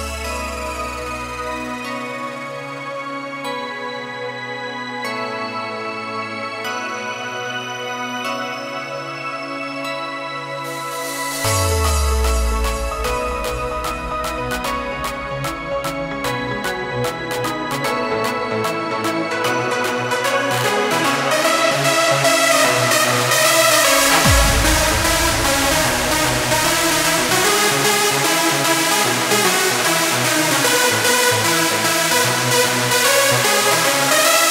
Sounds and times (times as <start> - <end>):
Exciting music: 0.0 - 2.5, 10.7 - 34.5
Disco: 11.1 - 34.5.